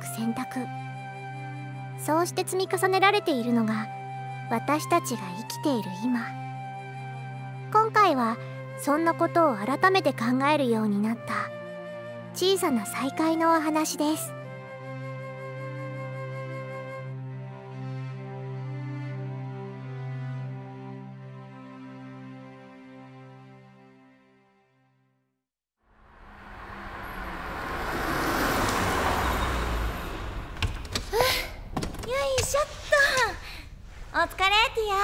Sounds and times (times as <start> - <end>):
Speech: 0.0 - 0.7, 2.0 - 3.9, 4.5 - 6.3, 7.8 - 11.5, 12.4 - 14.3, 32.1 - 33.5, 34.1 - 35.0
Music: 0.0 - 25.4.